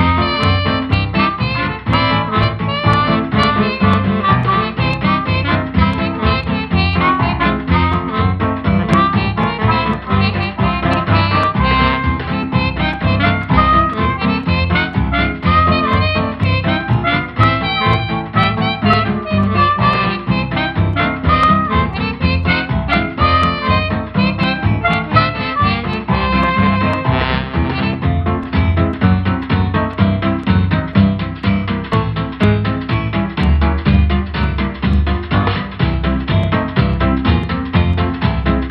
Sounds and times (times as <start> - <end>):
Music: 0.0 - 38.7.